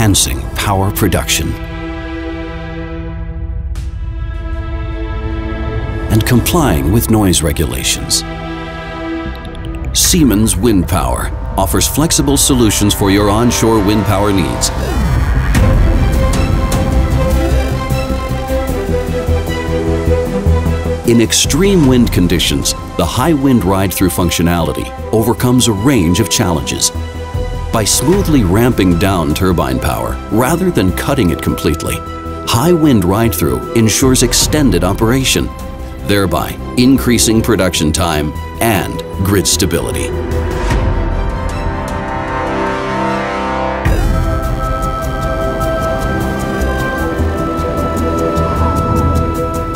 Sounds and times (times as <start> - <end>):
Speech: 0.0 - 1.6, 6.1 - 8.2, 10.0 - 15.1, 21.1 - 26.9, 27.7 - 40.1
Music: 0.0 - 49.7.